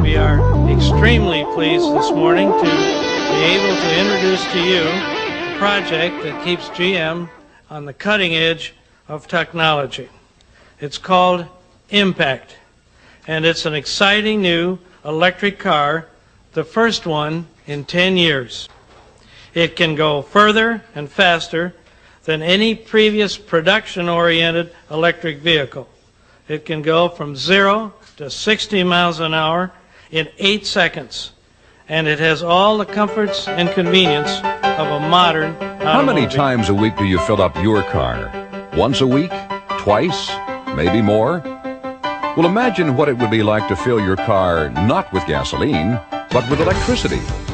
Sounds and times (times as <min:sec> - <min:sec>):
Speech: 0:00.0 - 0:05.0, 0:05.6 - 0:10.2, 0:10.8 - 0:12.7, 0:13.3 - 0:18.7, 0:19.6 - 0:41.5, 0:42.4 - 0:47.3.